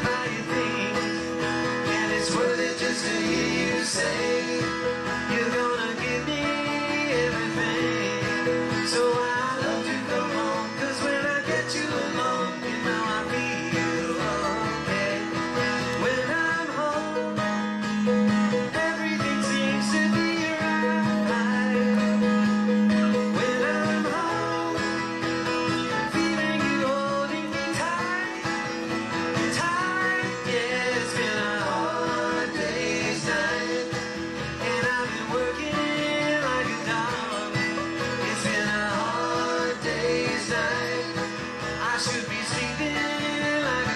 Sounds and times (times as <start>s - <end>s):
Country: 0.0s - 43.9s
Musical instrument: 0.0s - 43.9s.